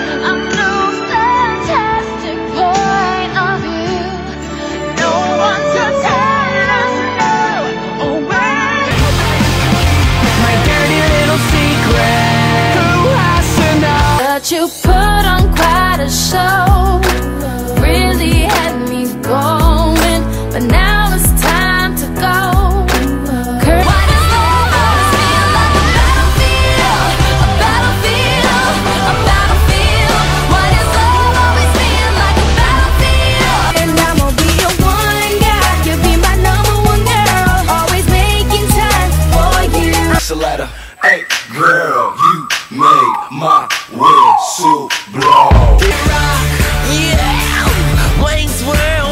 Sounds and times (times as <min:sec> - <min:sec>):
Exciting music: 0:04.6 - 0:18.9, 0:19.6 - 0:40.4, 0:42.2 - 0:49.1.